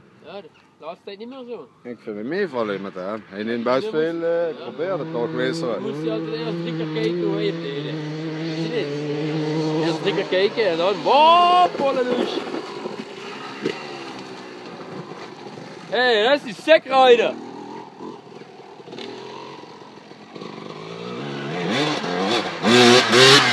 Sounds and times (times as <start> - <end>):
Field recording: 0.0 - 23.5
Speech: 0.2 - 8.0, 9.8 - 12.4, 15.9 - 17.4.